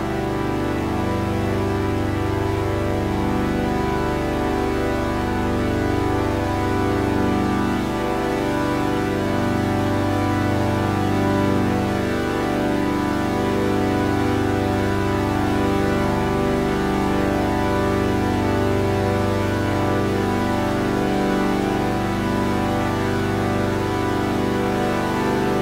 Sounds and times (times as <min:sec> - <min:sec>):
Music: 0:00.0 - 0:25.6.